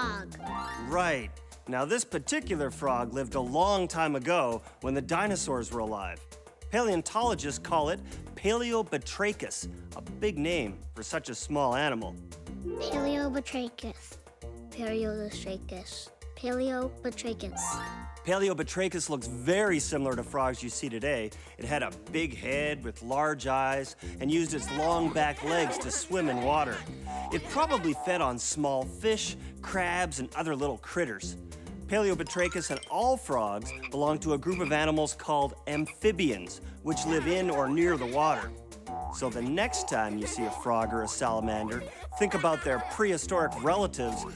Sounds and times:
Croak: 33.7 - 34.0.

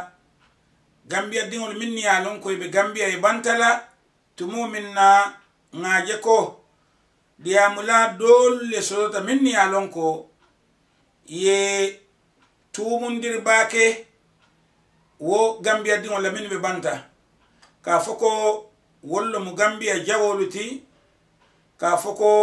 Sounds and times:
Speech: 1.1 - 6.6, 7.4 - 10.3, 11.3 - 12.1, 12.7 - 14.1, 15.2 - 17.2, 17.8 - 20.9, 21.8 - 22.4.

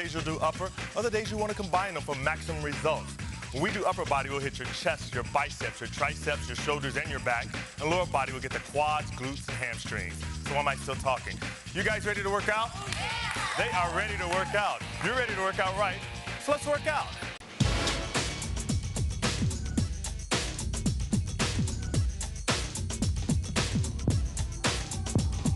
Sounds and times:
Speech: 0.0 - 12.8, 13.6 - 17.1
Music: 0.0 - 25.5.

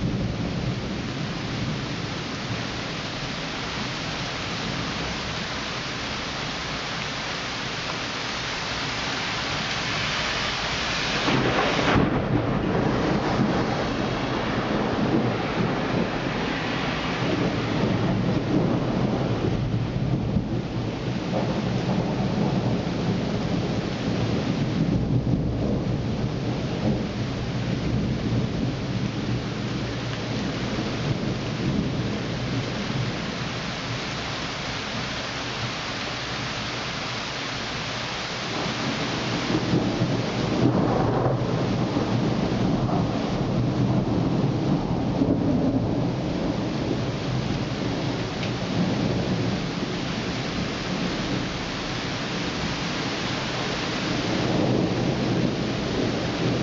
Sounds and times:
Rain: 0.0 - 56.6
Thunder: 10.9 - 33.4, 38.5 - 56.6.

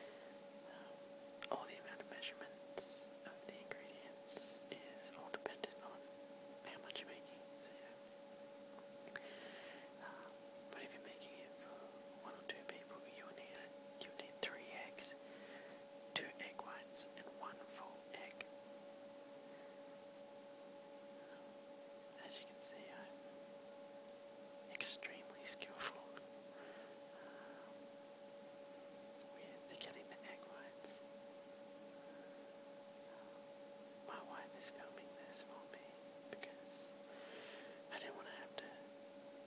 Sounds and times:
Whispering: 0.7 - 8.1, 10.0 - 15.2, 16.2 - 18.5, 21.2 - 21.5, 22.2 - 23.2, 24.7 - 26.3, 29.3 - 31.1, 34.1 - 36.9, 37.9 - 38.9.

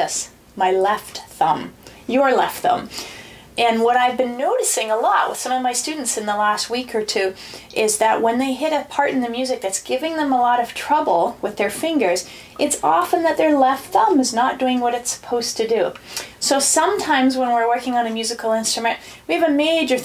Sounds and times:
Speech: 0.0 - 2.9, 3.6 - 20.0.

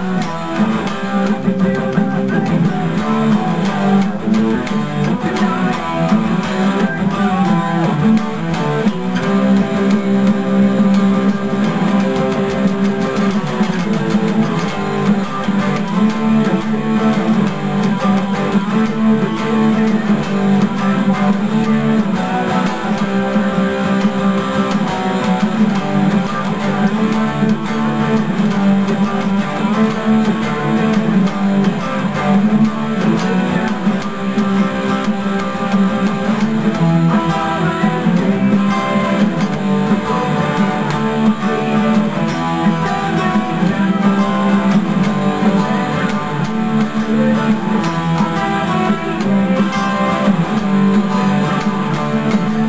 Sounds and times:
Bass guitar: 0.0 - 52.6.

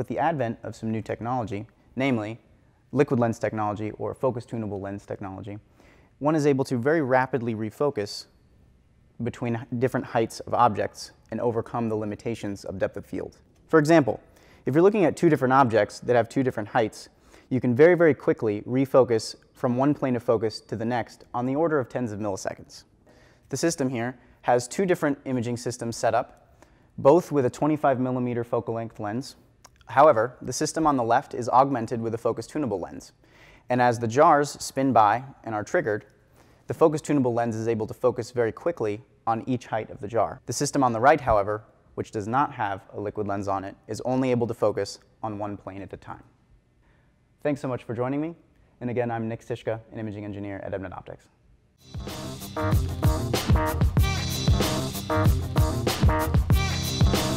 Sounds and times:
Speech: 0.0 - 5.6, 6.2 - 8.3, 9.2 - 22.9, 23.5 - 26.4, 27.0 - 36.1, 36.7 - 46.4, 47.4 - 51.4.

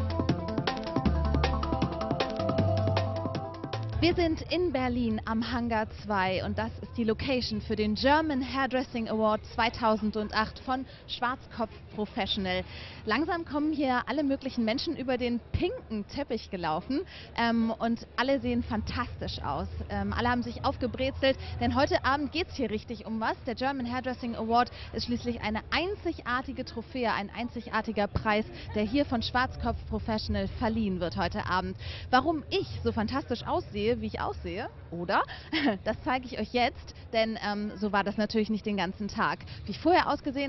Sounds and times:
Inside, public space: 0.0 - 40.4
Speech: 4.0 - 40.4.

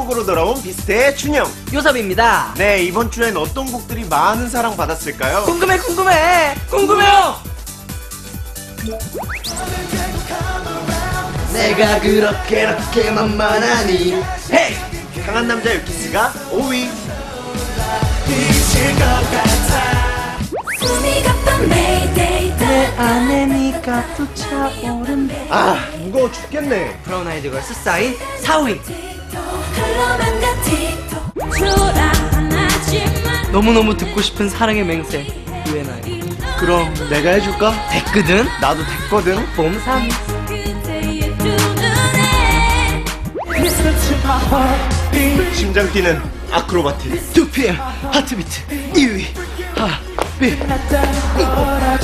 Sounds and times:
Music: 0.0 - 52.0.

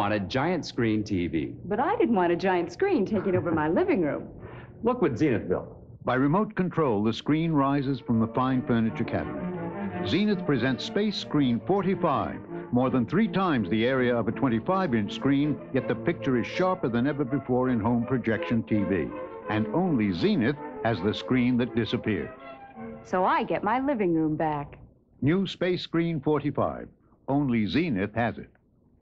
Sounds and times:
Speech: 0.0 - 22.3, 23.1 - 28.5
Music: 0.0 - 25.6.

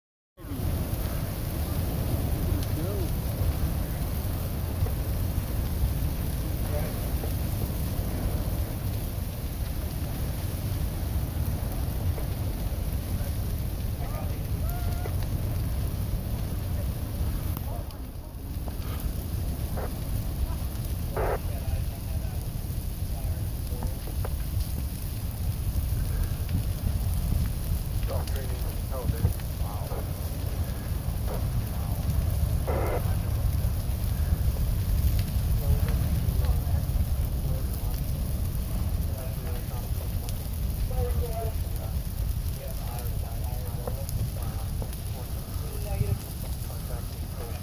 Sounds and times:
Fire: 0.4 - 47.6
Wind: 0.4 - 47.6.

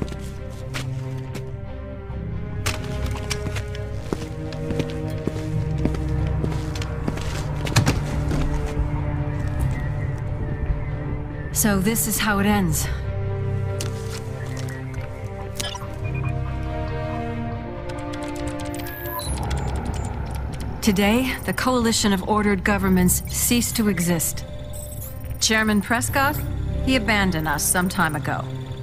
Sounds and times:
Music: 0.0 - 28.8
Speech: 20.8 - 24.4, 25.4 - 28.5.

